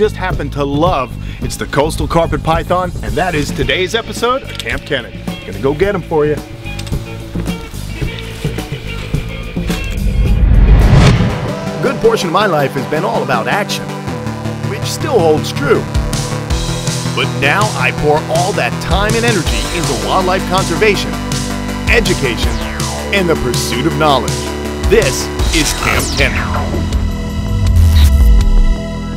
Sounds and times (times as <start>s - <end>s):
Speech: 0.0s - 6.4s, 11.8s - 13.9s, 14.7s - 15.9s, 17.2s - 21.2s, 21.9s - 26.8s
Music: 0.0s - 29.1s.